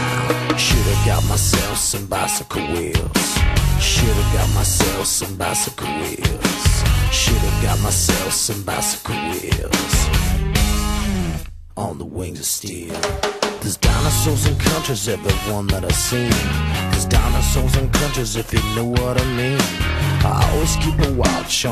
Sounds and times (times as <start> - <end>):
Music: 0.0 - 11.7, 12.8 - 21.7.